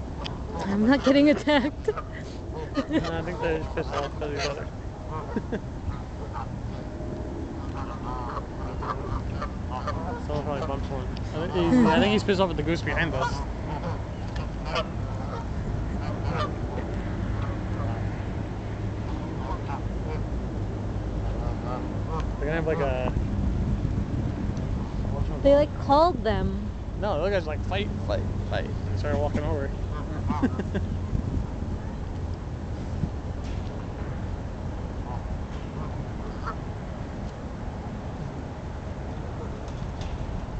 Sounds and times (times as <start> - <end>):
Honk: 2.6 - 6.5, 7.6 - 10.8, 13.1 - 18.0, 35.8 - 36.6.